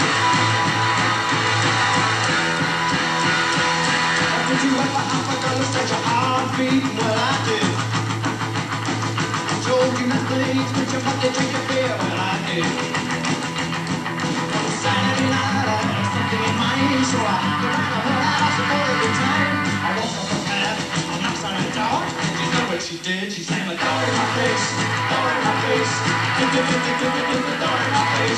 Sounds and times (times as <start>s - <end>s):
Music: 0.0s - 28.3s.